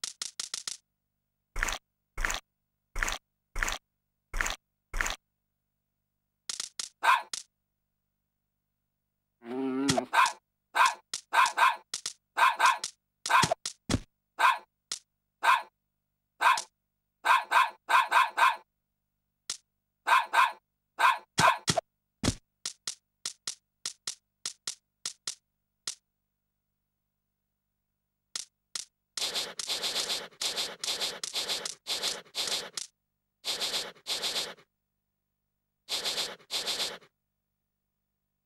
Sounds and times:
Bow-wow: 0:07.0 - 0:07.3, 0:10.0 - 0:11.8, 0:14.4 - 0:14.7, 0:15.4 - 0:15.7, 0:16.4 - 0:18.7, 0:20.0 - 0:21.6.

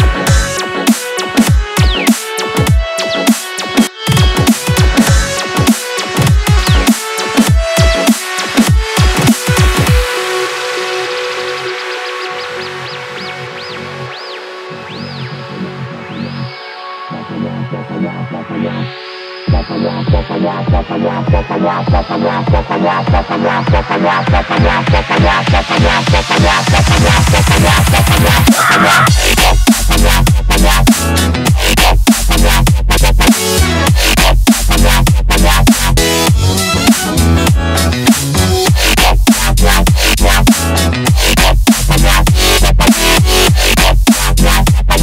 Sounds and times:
Dubstep: 0:00.0 - 0:45.0
Electronic dance music: 0:00.0 - 0:45.0.

